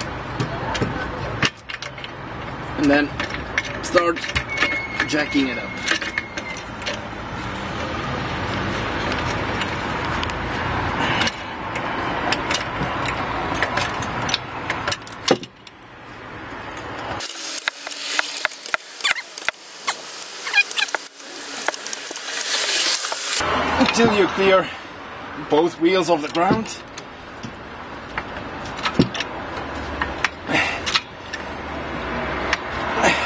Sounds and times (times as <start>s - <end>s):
Car: 0.0s - 17.2s, 20.4s - 33.2s.